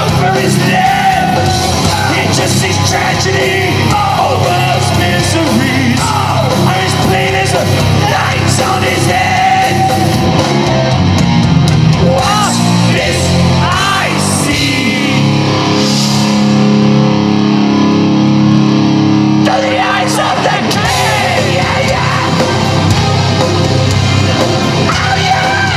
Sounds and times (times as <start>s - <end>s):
Crowd: 0.0s - 25.7s
Heavy metal: 0.0s - 25.7s.